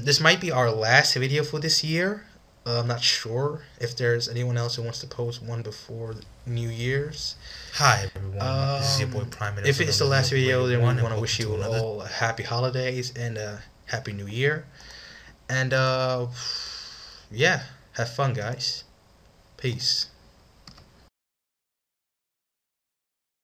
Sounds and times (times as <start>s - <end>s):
Speech: 0.0s - 14.7s, 15.5s - 16.6s, 17.3s - 18.9s, 19.6s - 20.2s.